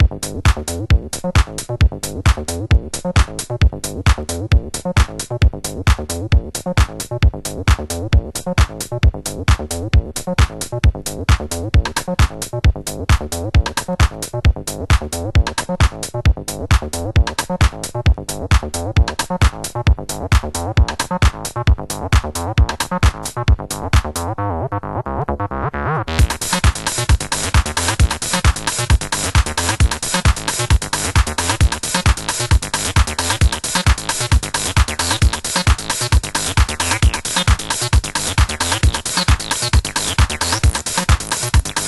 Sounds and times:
House music: 0.0s - 24.4s, 25.6s - 41.8s
Electronica: 0.0s - 41.8s
Sampler: 26.2s - 41.8s.

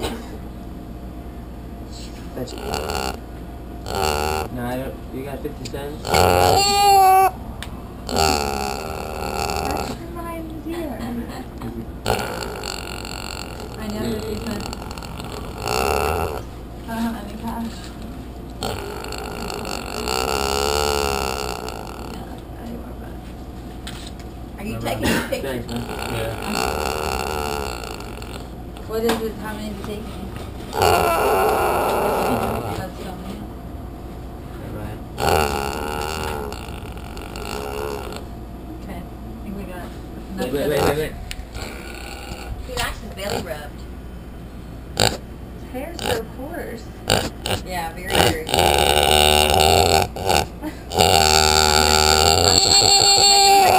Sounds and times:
Oink: 2.5s - 3.2s, 3.8s - 4.6s, 6.0s - 7.4s, 8.1s - 10.0s, 12.0s - 16.5s, 18.6s - 22.3s, 25.7s - 28.5s, 30.7s - 32.9s, 35.2s - 38.3s, 40.7s - 42.6s, 43.2s - 43.6s, 45.0s - 45.2s, 46.0s - 46.3s, 47.1s - 53.7s.

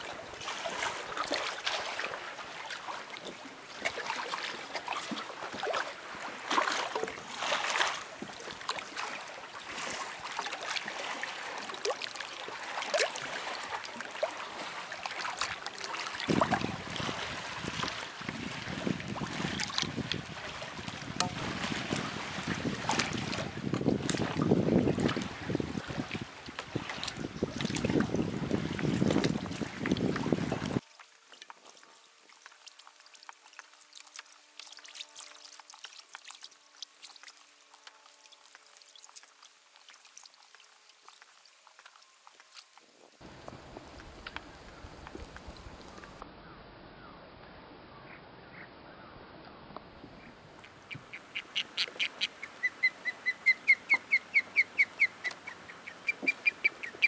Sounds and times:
Waves, surf: 0.0s - 46.3s, 49.7s - 57.0s
Wind noise (microphone): 16.3s - 30.8s.

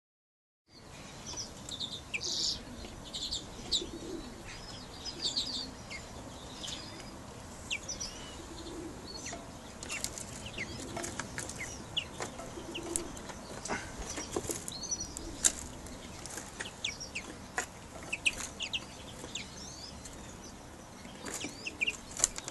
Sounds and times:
Chirp, tweet: 0.7s - 22.5s
Outside, urban or manmade: 0.7s - 22.5s.

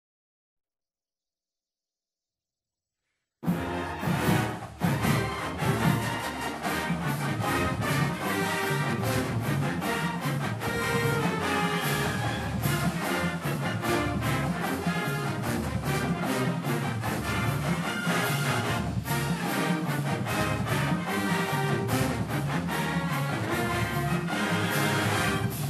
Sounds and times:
Music: 3.4s - 25.6s.

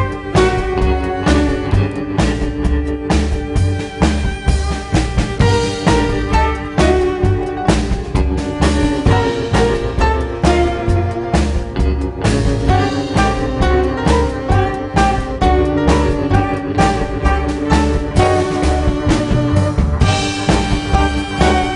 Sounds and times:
Cello: 0.0s - 21.7s
Double bass: 0.0s - 21.7s
Violin, fiddle: 0.0s - 21.7s.

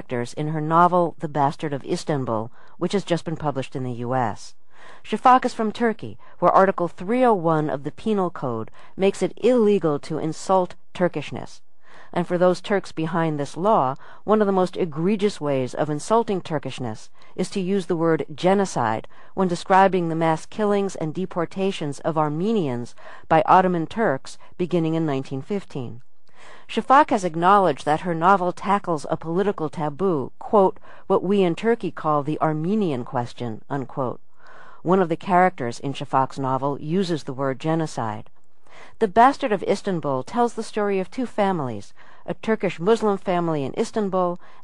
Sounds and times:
Speech: 0.0s - 26.0s, 26.7s - 34.2s, 34.8s - 38.3s, 39.0s - 44.4s.

